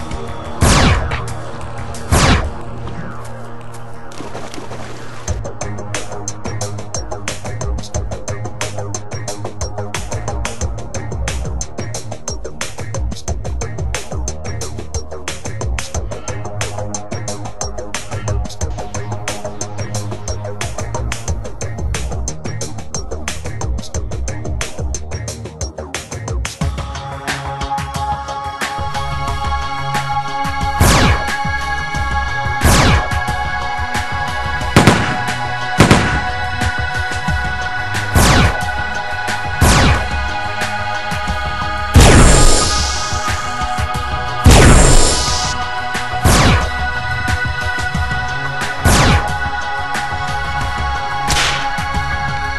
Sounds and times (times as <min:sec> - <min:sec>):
Music: 0:00.0 - 0:52.5.